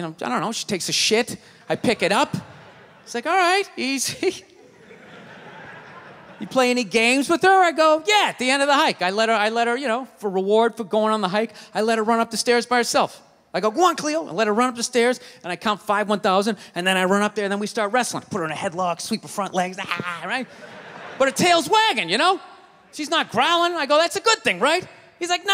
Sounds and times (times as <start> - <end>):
Speech: 0.0 - 4.5, 6.4 - 20.5, 21.2 - 25.5.